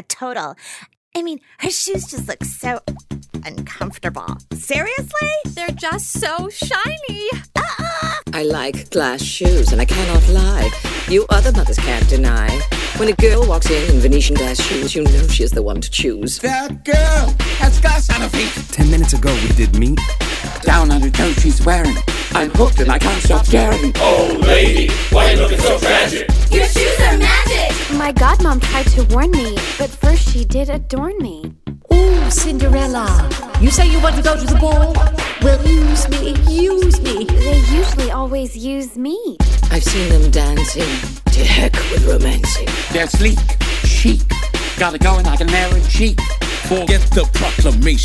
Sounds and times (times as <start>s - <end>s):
Speech: 0.0s - 2.8s, 3.4s - 20.0s, 20.6s - 44.2s, 44.8s - 48.0s
Music: 1.6s - 48.0s.